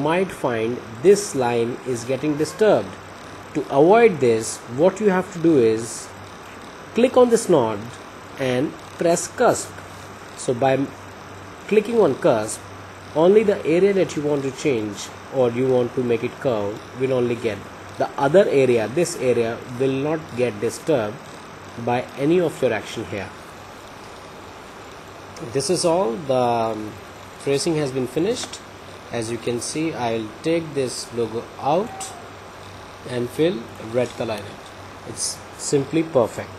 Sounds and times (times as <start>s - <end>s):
Speech: 0.0s - 3.0s, 3.6s - 6.2s, 7.0s - 9.8s, 10.4s - 11.0s, 11.7s - 21.2s, 21.8s - 23.4s, 25.4s - 32.2s, 33.0s - 36.5s.